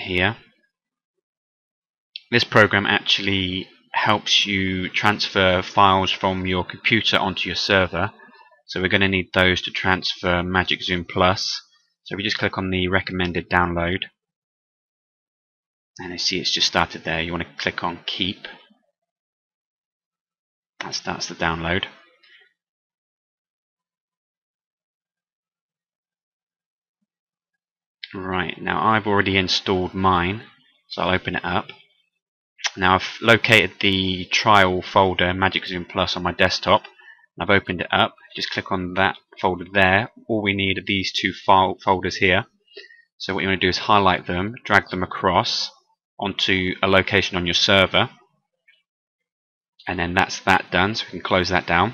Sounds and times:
Speech: 0.0 - 0.5, 2.2 - 14.2, 16.0 - 18.7, 20.8 - 22.1, 28.0 - 31.9, 32.6 - 48.2, 49.8 - 51.9.

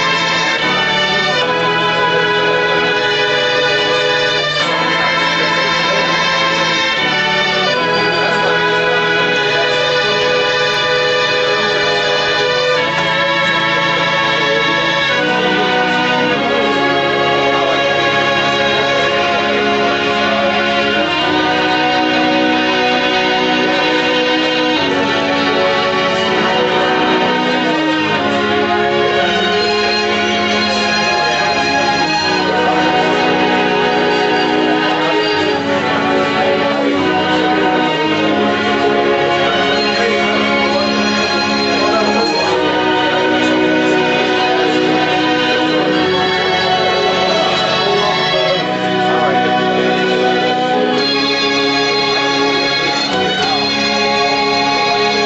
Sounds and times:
Harmonic: 0.0 - 55.2
Organ: 0.0 - 55.2.

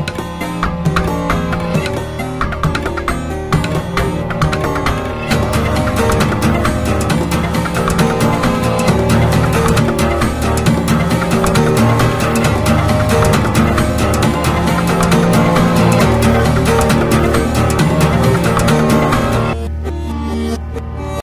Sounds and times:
Music: 0.0 - 21.2.

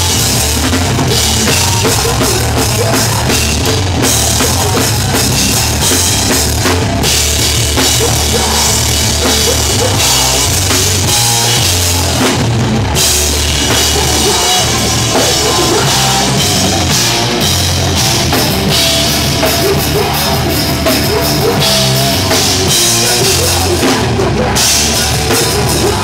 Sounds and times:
Drum: 0.0 - 26.0
Drum kit: 0.0 - 26.0
Heavy metal: 0.0 - 26.0
Punk rock: 0.0 - 26.0.

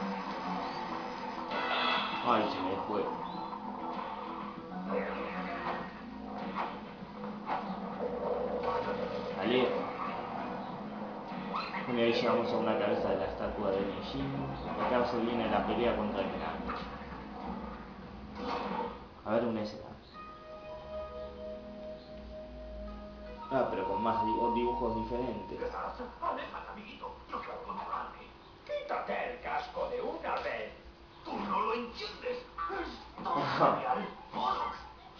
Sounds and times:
Speech: 11.9 - 16.6, 23.5 - 34.9.

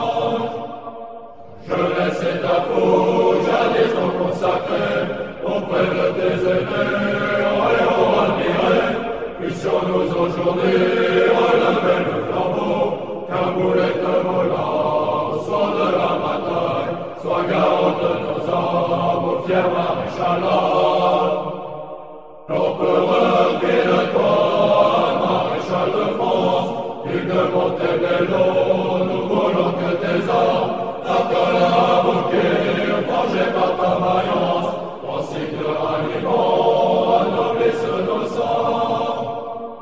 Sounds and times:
Mantra: 0.0 - 21.6, 22.5 - 39.7.

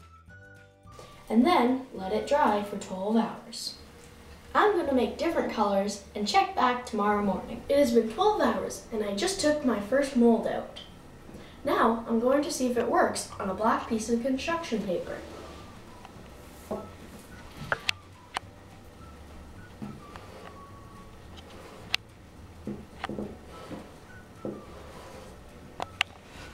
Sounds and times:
Child speech, kid speaking: 1.3 - 3.8, 4.6 - 10.8, 11.6 - 15.2.

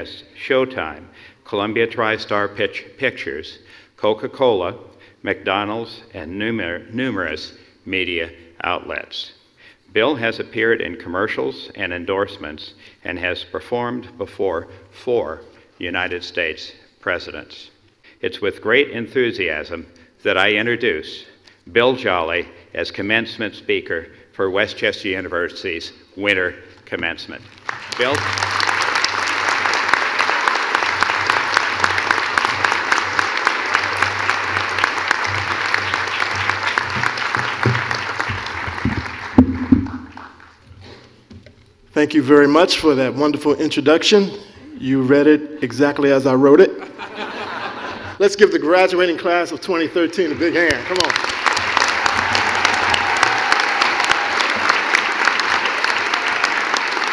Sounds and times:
Male speech, man speaking: 0.0 - 9.4, 10.0 - 28.2, 42.0 - 46.8, 48.2 - 51.2.

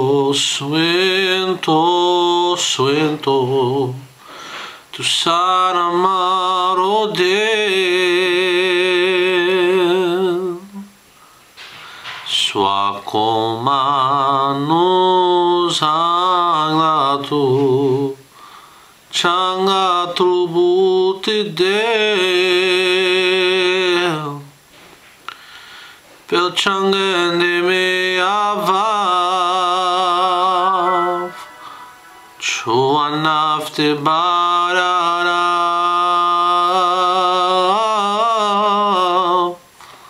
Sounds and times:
Male singing: 0.0 - 4.1, 4.9 - 10.9, 12.2 - 18.2, 19.1 - 24.5, 26.3 - 31.7, 32.4 - 39.6
Music: 30.5 - 33.2.

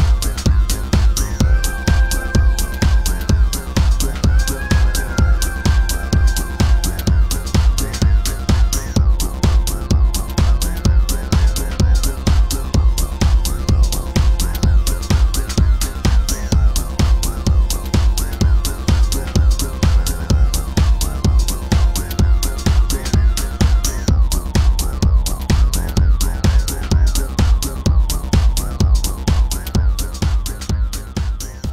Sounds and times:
Electronic music: 0.0 - 31.7.

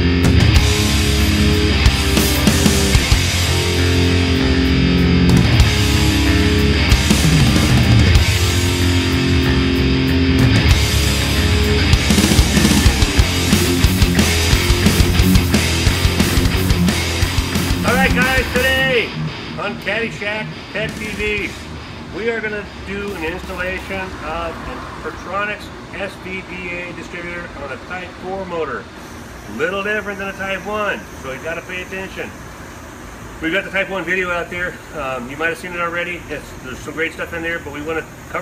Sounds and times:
Speech: 17.8 - 28.9, 29.5 - 32.4, 33.4 - 38.4.

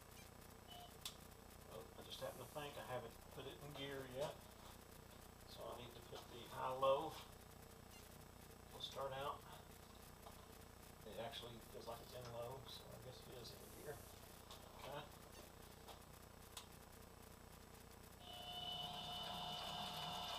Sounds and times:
Speech: 1.7 - 4.4, 5.5 - 7.2, 8.7 - 9.6, 11.0 - 14.1, 14.8 - 15.1.

